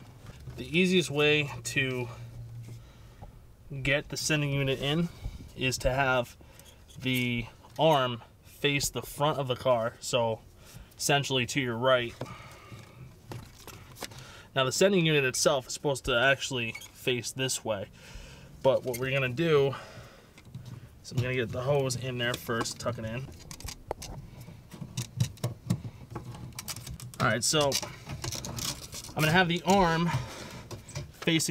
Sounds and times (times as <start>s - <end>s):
Speech: 0.6s - 2.2s, 3.7s - 6.3s, 7.0s - 10.4s, 11.0s - 12.2s, 14.6s - 17.9s, 18.6s - 19.8s, 21.1s - 23.3s, 27.2s - 27.8s, 29.2s - 30.2s, 31.2s - 31.5s.